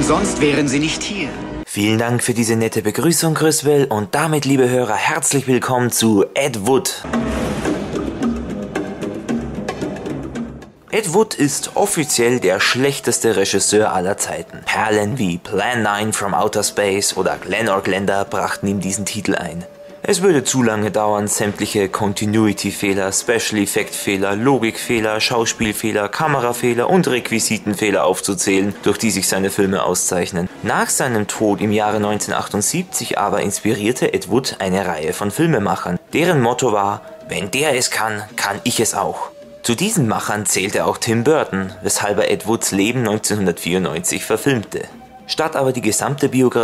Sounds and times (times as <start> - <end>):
Speech: 0.0 - 7.1, 10.9 - 46.6
Music: 0.0 - 46.6.